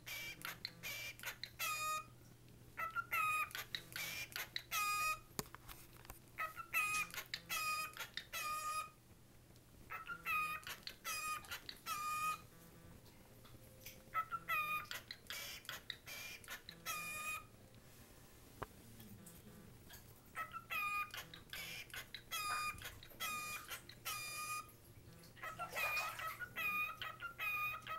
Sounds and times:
Bird: 0.0s - 2.1s, 2.8s - 5.3s, 6.4s - 9.0s, 9.9s - 12.5s, 13.8s - 17.5s, 19.9s - 27.9s
Domestic animals, pets: 0.1s - 2.1s, 2.8s - 5.2s, 6.4s - 9.0s, 9.9s - 12.8s, 14.0s - 17.5s, 19.0s - 27.9s.

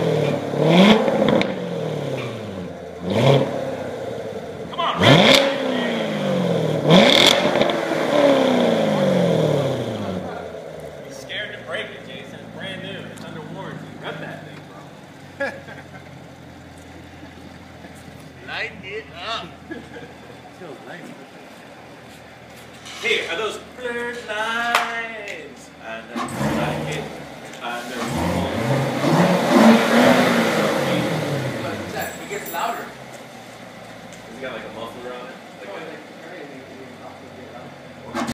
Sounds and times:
Accelerating, revving, vroom: 0.0s - 4.1s, 5.0s - 10.3s, 26.2s - 27.2s, 27.9s - 31.9s
Car: 0.0s - 38.3s
Speech: 4.7s - 6.0s, 11.1s - 15.0s, 18.4s - 19.6s, 20.5s - 21.2s, 23.0s - 28.7s, 30.9s - 33.0s, 34.3s - 38.3s.

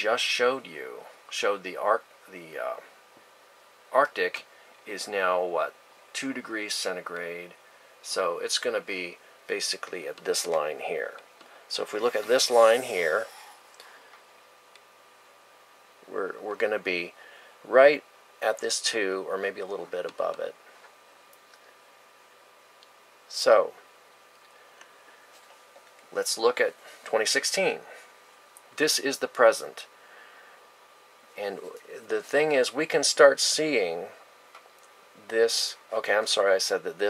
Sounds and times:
Speech: 0.0s - 2.9s, 3.9s - 13.4s, 16.0s - 20.6s, 23.3s - 23.8s, 26.1s - 28.0s, 28.8s - 29.9s, 31.4s - 34.2s, 35.2s - 37.0s.

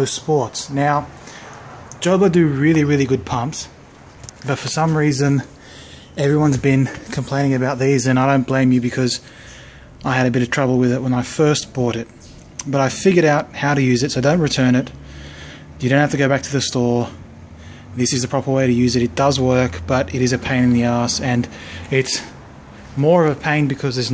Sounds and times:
Speech: 0.0s - 1.1s, 2.0s - 3.8s, 4.4s - 5.5s, 6.2s - 9.3s, 10.0s - 15.0s, 15.8s - 17.2s, 18.0s - 22.4s, 23.0s - 24.1s.

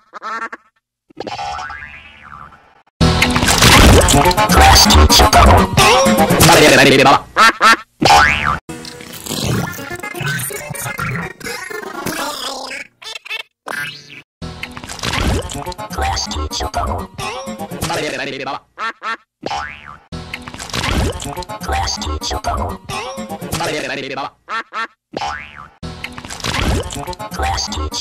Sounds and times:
Music: 3.0s - 6.6s, 14.4s - 14.8s, 15.5s - 17.8s, 20.2s - 20.6s, 21.2s - 23.6s, 25.8s - 26.2s.

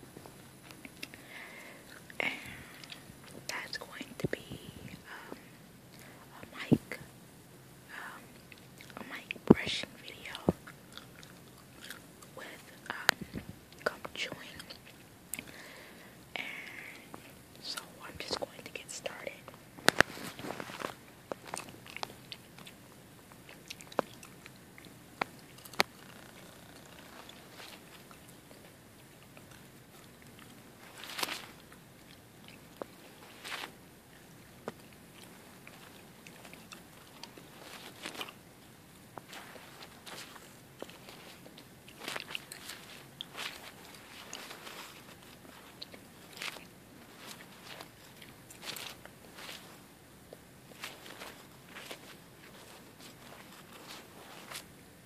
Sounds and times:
Chewing, mastication: 1.9s - 3.4s, 8.3s - 9.4s, 10.2s - 15.6s, 19.8s - 54.7s.

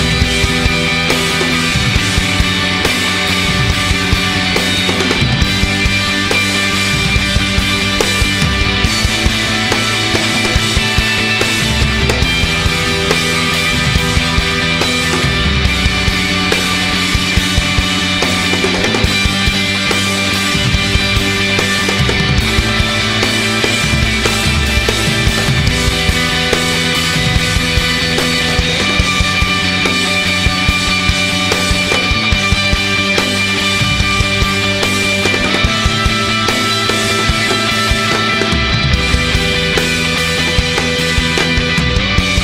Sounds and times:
Music: 0.0s - 42.4s.

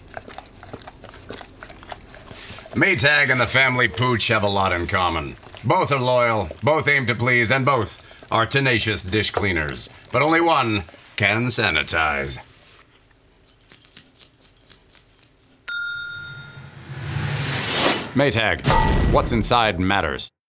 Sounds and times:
Speech: 18.2s - 20.4s.

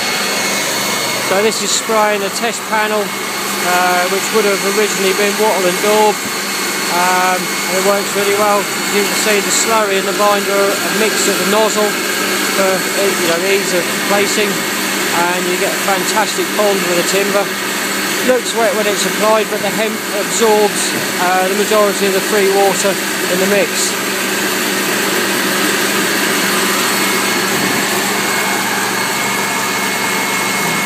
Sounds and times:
Speech: 1.3s - 6.2s, 6.9s - 17.5s, 18.2s - 24.0s.

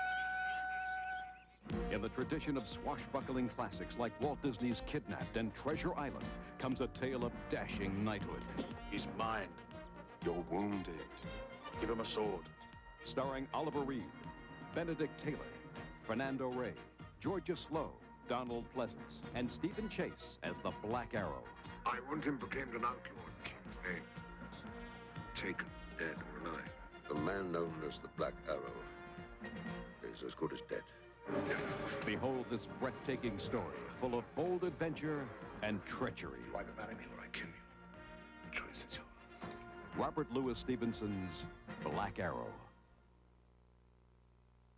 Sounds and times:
Music: 0.0s - 43.2s
Speech: 1.9s - 9.6s, 10.2s - 11.2s, 11.8s - 12.4s, 13.0s - 14.2s, 14.8s - 15.5s, 16.1s - 24.7s, 25.4s - 28.9s, 30.0s - 37.6s, 38.5s - 39.1s, 39.9s - 42.7s.

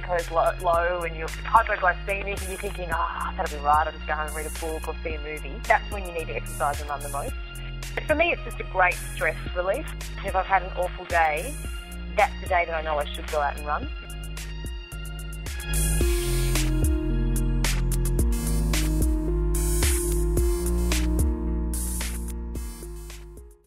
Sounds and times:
Speech: 0.0s - 7.3s, 8.0s - 11.6s, 12.2s - 13.9s
Music: 0.0s - 23.6s.

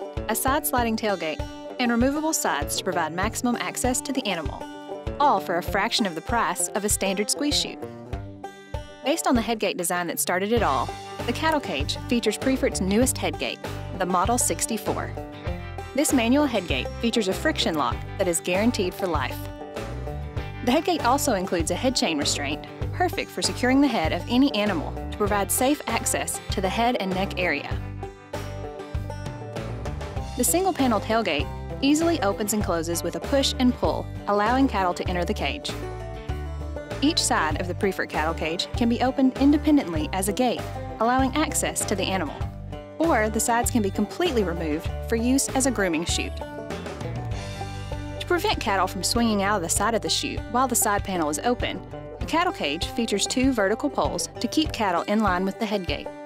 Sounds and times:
Music: 0.0s - 56.2s
Speech: 0.3s - 7.8s, 9.1s - 15.2s, 16.0s - 19.5s, 20.7s - 27.8s, 30.4s - 35.8s, 37.0s - 46.4s, 48.2s - 56.1s.

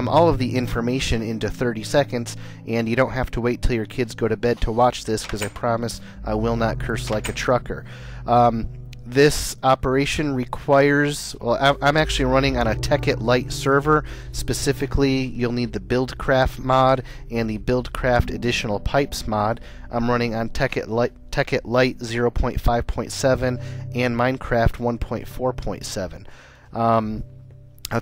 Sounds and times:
Speech: 0.0s - 27.2s.

